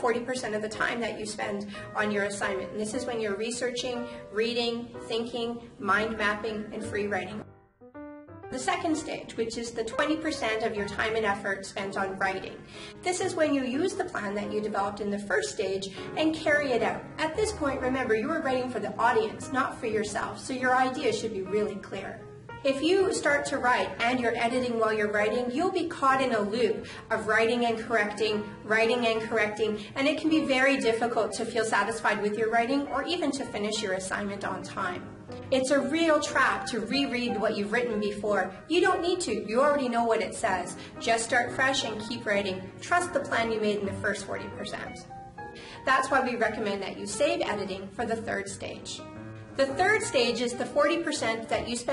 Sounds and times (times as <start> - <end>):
Speech: 0.0 - 7.5, 8.6 - 45.1, 45.8 - 51.9
Music: 0.0 - 51.9.